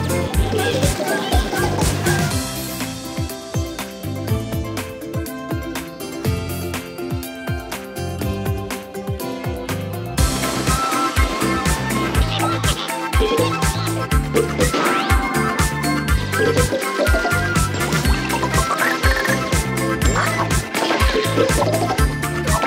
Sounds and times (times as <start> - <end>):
Music: 0.0 - 22.6.